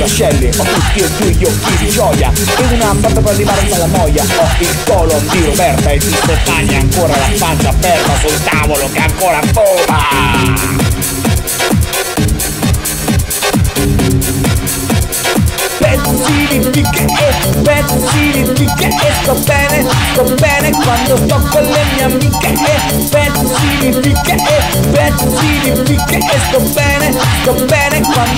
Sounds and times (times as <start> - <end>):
Techno: 0.0 - 28.3
Trance music: 0.0 - 28.3.